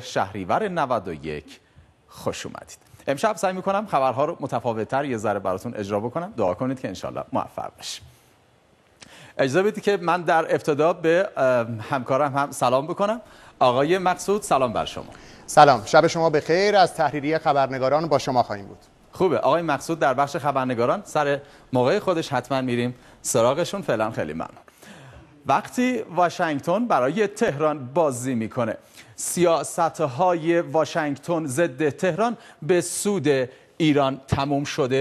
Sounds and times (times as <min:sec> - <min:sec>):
Speech: 0:00.0 - 0:08.1, 0:09.4 - 0:24.6, 0:25.4 - 0:35.0.